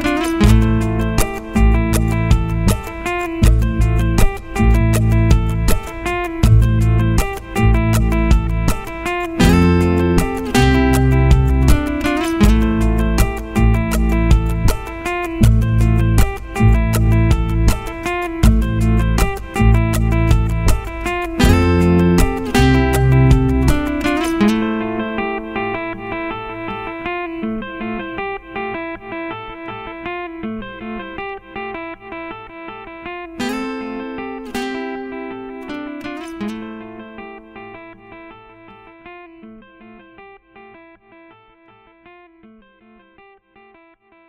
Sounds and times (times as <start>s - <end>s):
Acoustic guitar: 0.0s - 42.9s
Inside, small room: 0.0s - 44.2s.